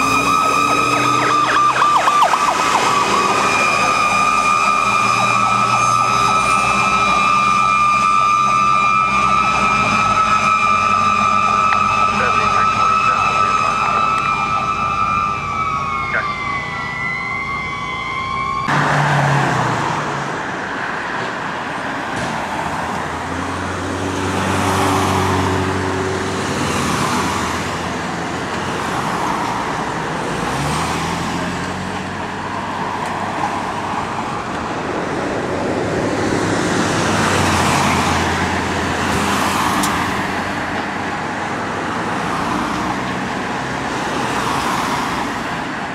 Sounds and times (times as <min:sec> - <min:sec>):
Accelerating, revving, vroom: 0:00.0 - 0:12.2, 0:18.7 - 0:20.4, 0:22.2 - 0:33.8, 0:34.6 - 0:41.1
Car: 0:00.0 - 0:45.9.